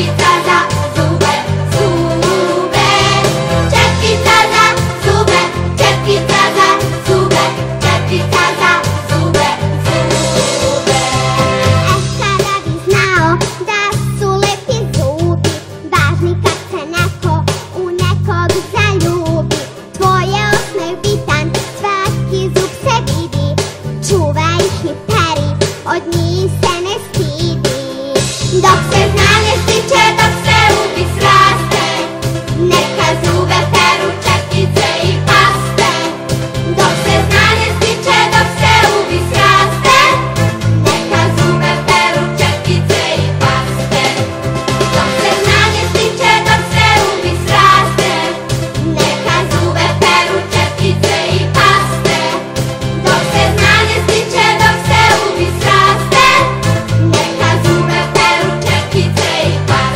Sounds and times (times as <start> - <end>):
Music for children: 0.0 - 59.9.